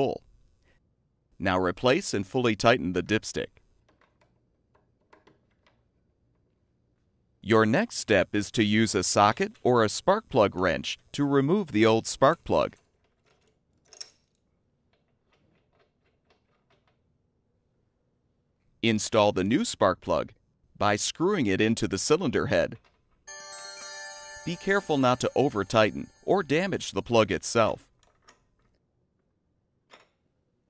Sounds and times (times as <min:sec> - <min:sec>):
Speech: 0:00.0 - 0:00.2, 0:01.4 - 0:03.6, 0:07.4 - 0:12.8, 0:18.8 - 0:22.8, 0:24.4 - 0:27.9
Music: 0:23.3 - 0:26.7.